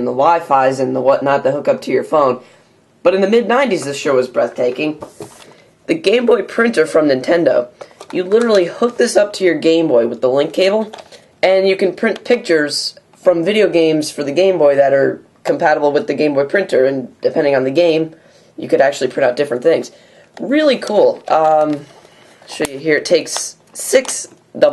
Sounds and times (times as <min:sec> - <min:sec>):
Speech: 0:00.0 - 0:02.4, 0:03.0 - 0:05.1, 0:05.9 - 0:24.7.